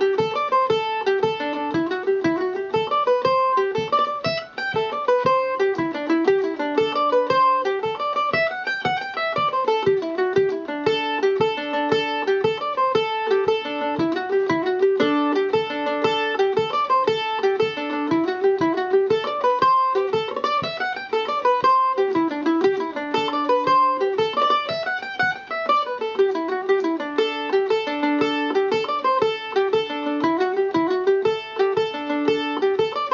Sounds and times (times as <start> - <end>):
Mandolin: 0.0 - 33.1.